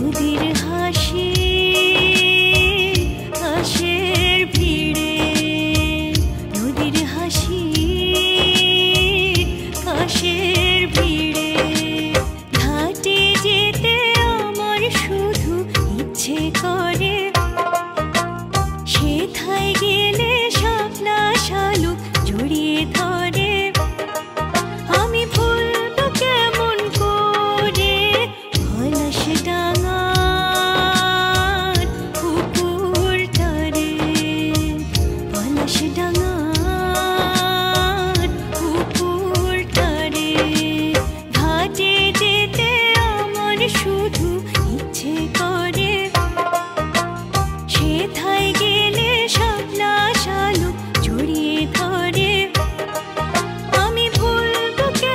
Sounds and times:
Music of Bollywood: 0:00.0 - 0:55.1.

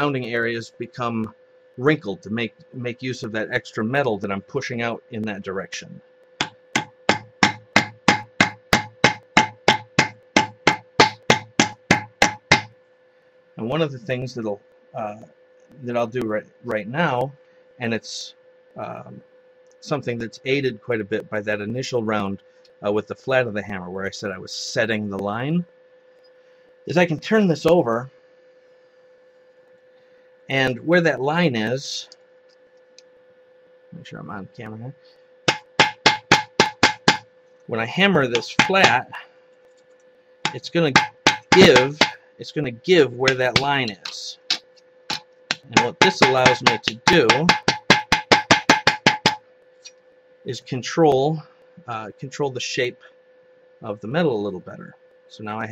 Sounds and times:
Hammer: 0:06.4 - 0:12.7, 0:35.5 - 0:37.3, 0:38.3 - 0:39.0, 0:40.5 - 0:42.2, 0:43.2 - 0:49.4.

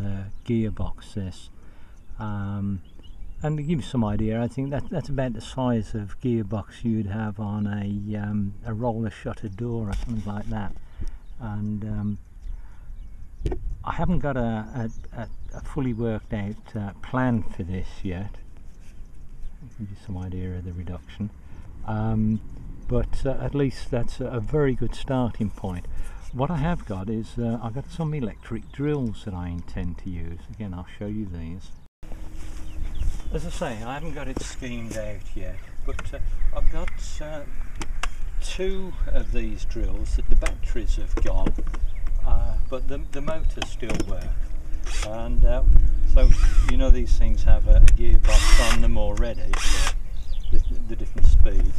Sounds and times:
Speech: 0:00.0 - 0:01.5, 0:02.2 - 0:10.8, 0:11.4 - 0:12.2, 0:13.8 - 0:18.4, 0:19.6 - 0:31.8, 0:33.3 - 0:37.6, 0:38.4 - 0:41.6, 0:42.2 - 0:44.4, 0:45.0 - 0:49.6, 0:50.5 - 0:51.7.

